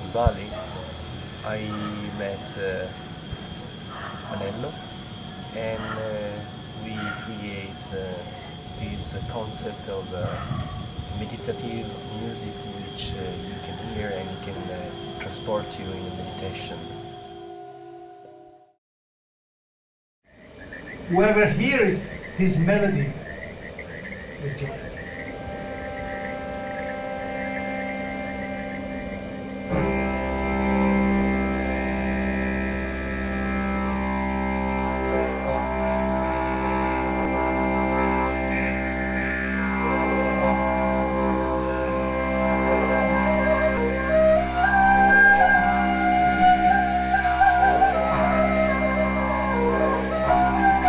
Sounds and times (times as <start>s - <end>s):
Speech: 0.0s - 0.6s, 1.5s - 2.9s, 4.3s - 4.8s, 5.6s - 10.4s, 11.2s - 16.8s, 21.1s - 23.2s, 24.4s - 24.8s.